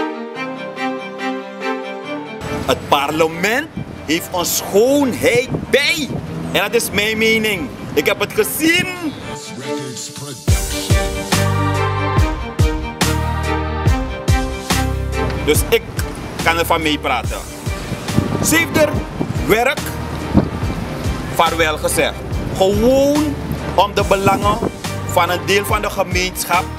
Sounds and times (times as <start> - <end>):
Music: 0.0 - 26.7
Speech: 2.7 - 10.5, 15.5 - 17.4, 18.4 - 19.9, 21.4 - 26.7.